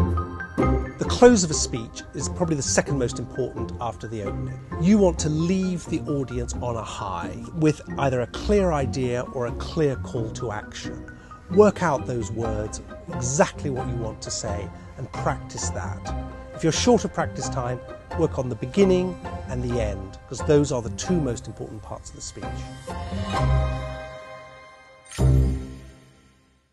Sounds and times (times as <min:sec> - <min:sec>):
Music: 0:00.0 - 0:26.7
Narration, monologue: 0:00.9 - 0:24.1
Male speech, man speaking: 0:01.0 - 0:22.6.